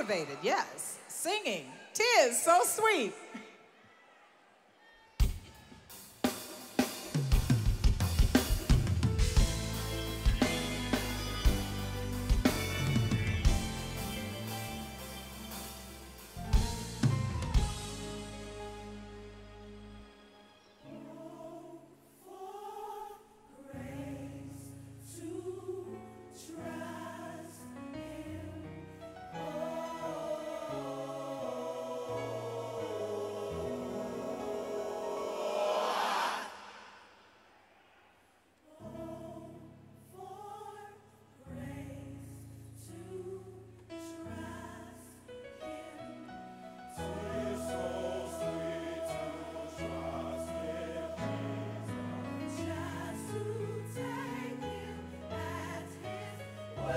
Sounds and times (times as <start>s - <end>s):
Music: 5.2s - 36.3s, 38.8s - 56.9s.